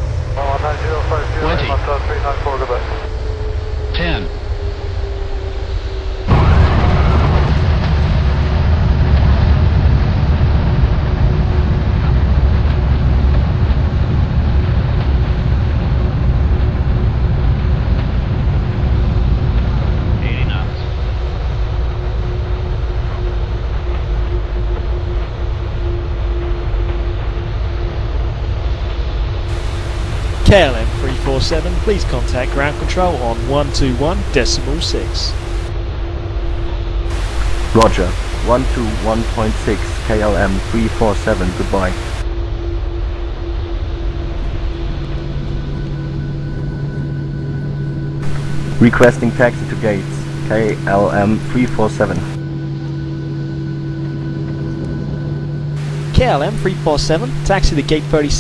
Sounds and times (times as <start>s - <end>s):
Outside, urban or manmade: 0.0s - 58.4s
Speech: 0.4s - 3.1s, 4.0s - 4.4s, 20.2s - 20.9s, 30.5s - 35.4s, 37.7s - 42.0s, 48.8s - 52.4s, 56.1s - 58.4s.